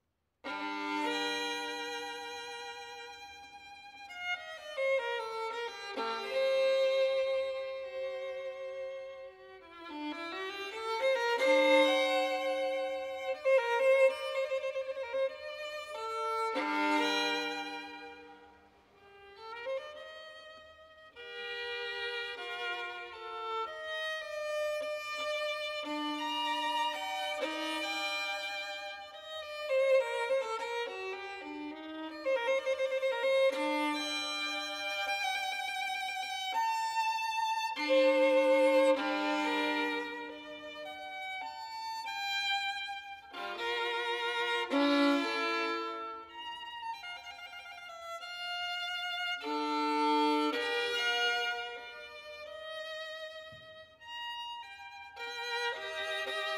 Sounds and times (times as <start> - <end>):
Violin, fiddle: 0.0 - 56.5.